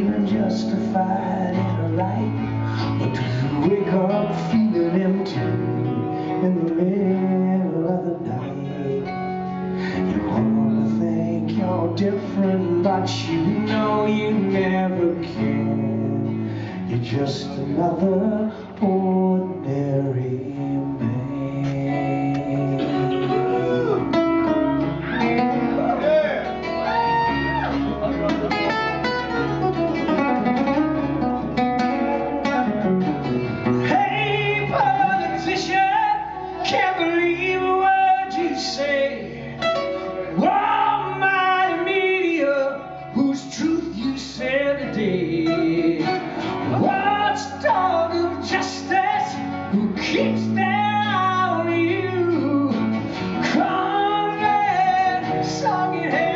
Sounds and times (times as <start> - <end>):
Guitar: 0.0 - 56.3
Singing: 33.8 - 39.6, 40.3 - 56.3.